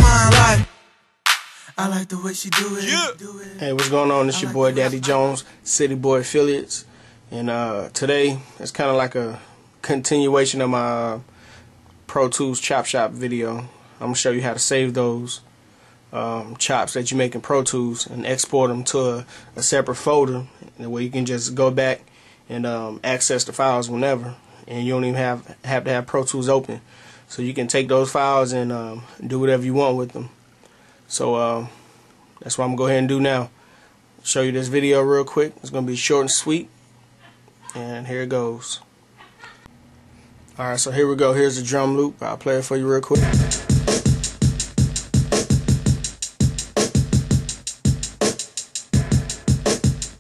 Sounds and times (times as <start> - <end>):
Speech: 1.7 - 11.2, 12.1 - 15.4, 16.2 - 30.4, 31.1 - 31.7, 32.4 - 33.5, 34.2 - 36.7, 37.6 - 38.9, 40.6 - 43.3.